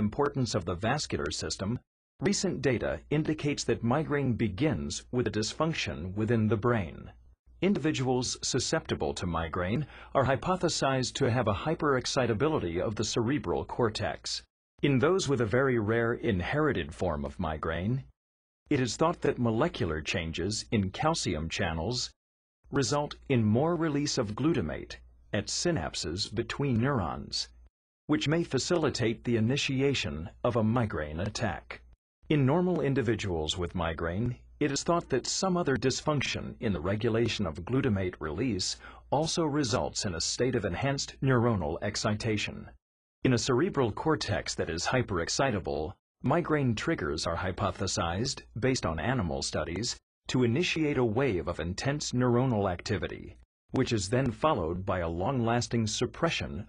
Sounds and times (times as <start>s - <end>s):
Speech: 0.0s - 56.6s.